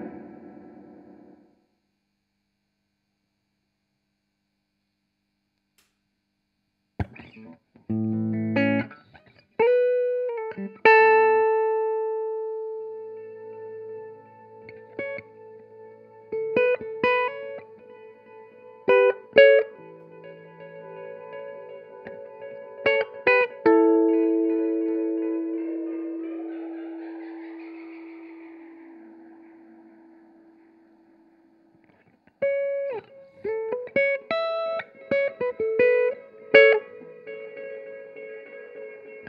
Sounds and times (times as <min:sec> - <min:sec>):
Guitar: 0:00.0 - 0:01.6, 0:07.0 - 0:39.2
Effects unit: 0:00.0 - 0:02.7, 0:03.4 - 0:39.2.